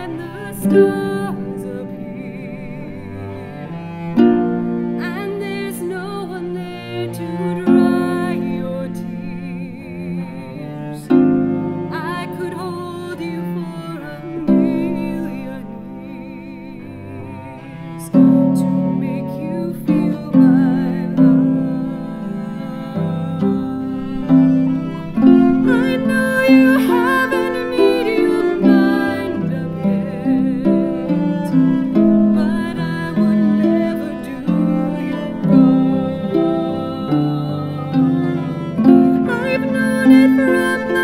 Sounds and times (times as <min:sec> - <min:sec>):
Cello: 0:00.0 - 0:41.0
Plucked string instrument: 0:00.0 - 0:41.0.